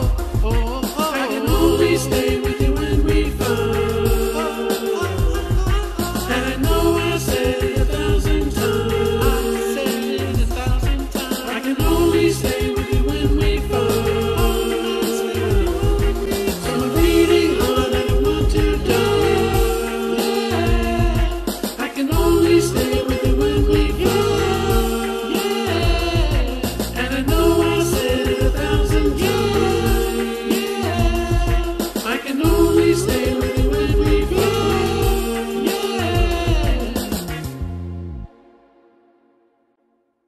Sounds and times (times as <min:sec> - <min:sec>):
Music: 0:00.0 - 0:40.2.